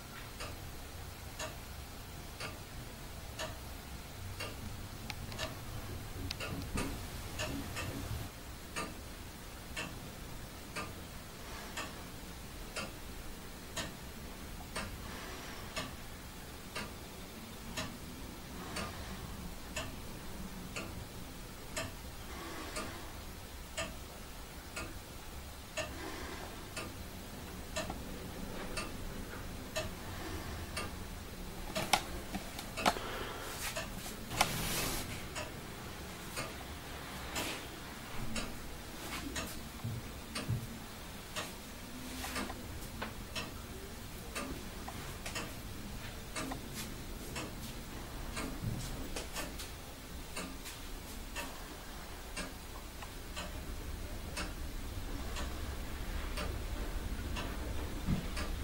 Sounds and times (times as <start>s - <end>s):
Tick-tock: 0.2s - 0.6s, 1.3s - 1.7s, 2.3s - 3.7s, 4.3s - 5.6s, 6.2s - 9.0s, 9.7s - 10.0s, 10.6s - 15.1s, 15.8s - 31.0s, 31.7s - 33.0s, 38.2s - 58.6s.